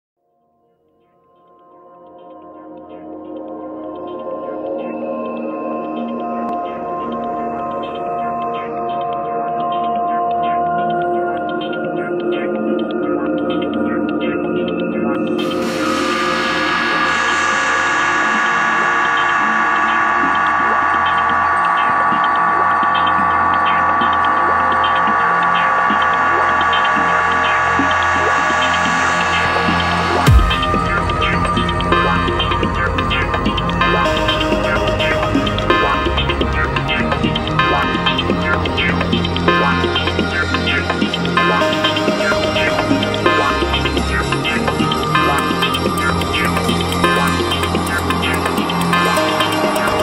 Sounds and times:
Ambient music: 0:00.6 - 0:50.0.

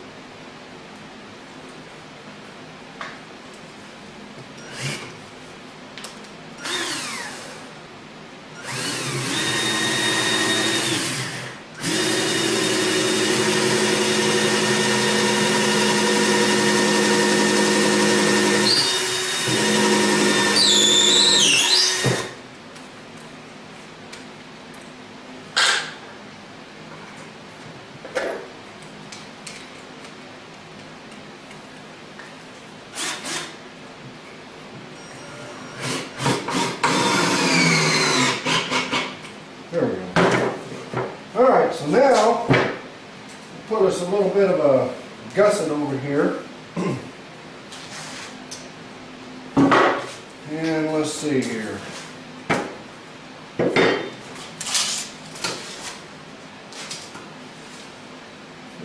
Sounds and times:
Drill: 0:04.6 - 0:05.1, 0:06.6 - 0:07.7, 0:08.6 - 0:22.4, 0:32.9 - 0:33.6, 0:35.0 - 0:39.1.

